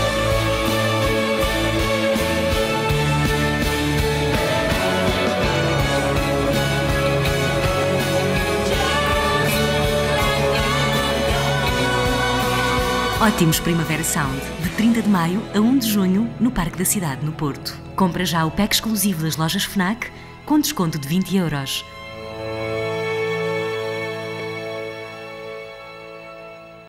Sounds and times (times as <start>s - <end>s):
Music: 0.0s - 26.8s
Speech: 13.2s - 21.9s.